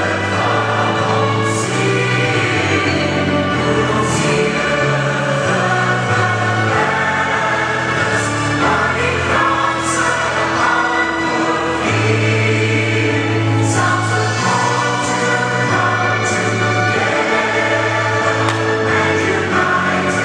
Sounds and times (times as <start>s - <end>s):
Music: 0.0s - 20.2s.